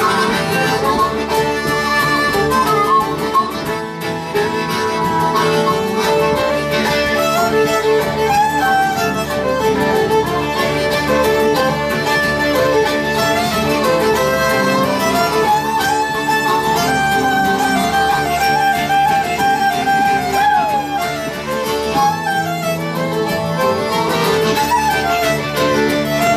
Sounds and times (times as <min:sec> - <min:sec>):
Harmonica: 0:00.0 - 0:26.3
Wind instrument, woodwind instrument: 0:00.0 - 0:26.3.